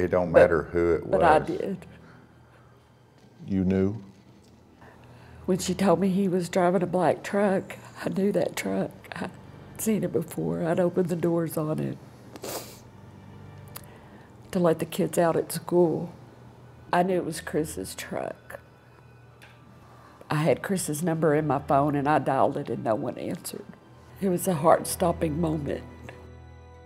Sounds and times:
Inside, small room: 0.0 - 26.8.

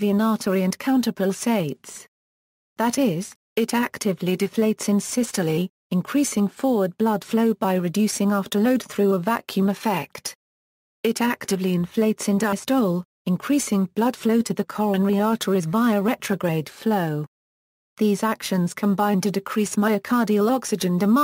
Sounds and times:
Speech: 0.0 - 2.1, 2.8 - 10.4, 11.0 - 17.3, 18.0 - 21.2.

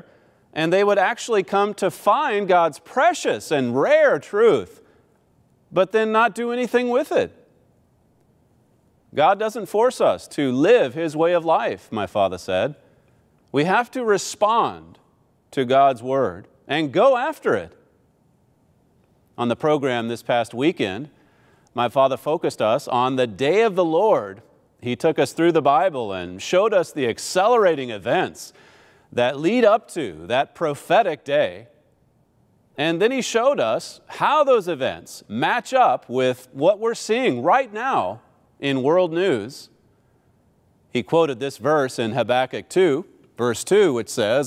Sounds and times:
Speech: 0.6 - 4.8, 5.8 - 7.4, 9.2 - 12.8, 13.6 - 17.8, 19.4 - 21.1, 21.8 - 28.6, 29.2 - 31.7, 32.8 - 39.8, 41.0 - 44.4.

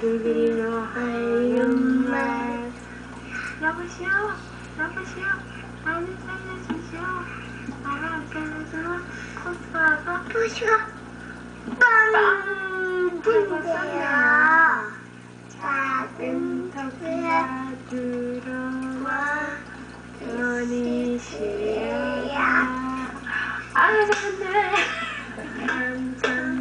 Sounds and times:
Lullaby: 15.6 - 23.2.

